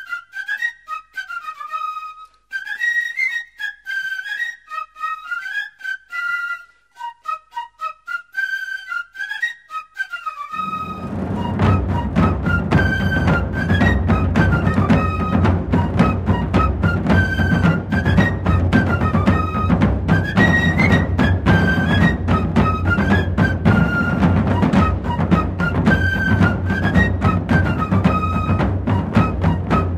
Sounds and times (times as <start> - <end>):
Music: 0.0 - 29.9.